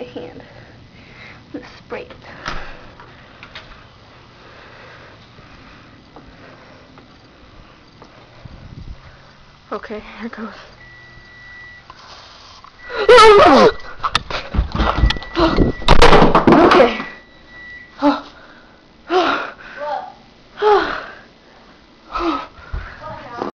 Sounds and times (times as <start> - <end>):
Speech: 23.0 - 23.5.